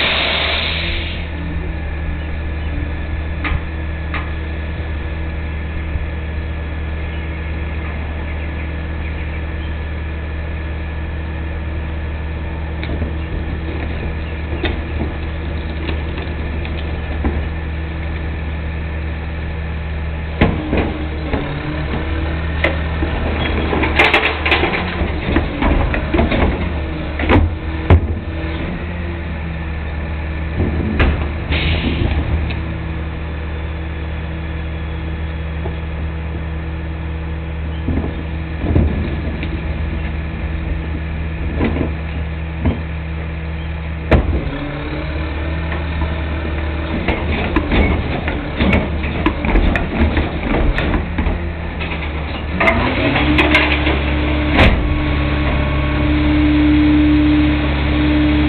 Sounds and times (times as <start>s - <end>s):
Vehicle: 0.0s - 58.4s.